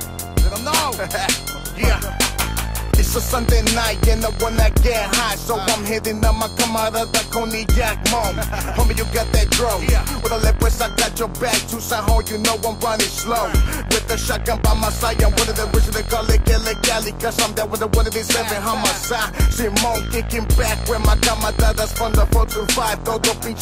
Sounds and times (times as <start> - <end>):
Music: 0.0 - 23.6.